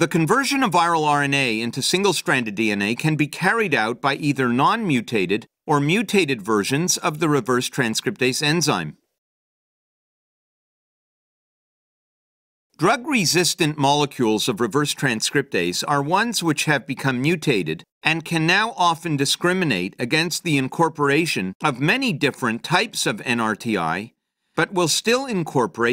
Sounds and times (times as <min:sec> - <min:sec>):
Speech: 0:00.0 - 0:09.1, 0:12.8 - 0:25.9.